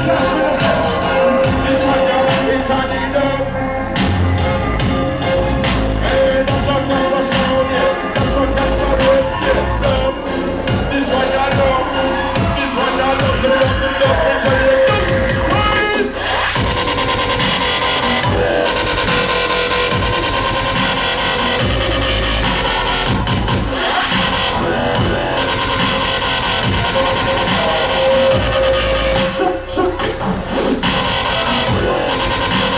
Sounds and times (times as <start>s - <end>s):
Dubstep: 0.0s - 32.7s.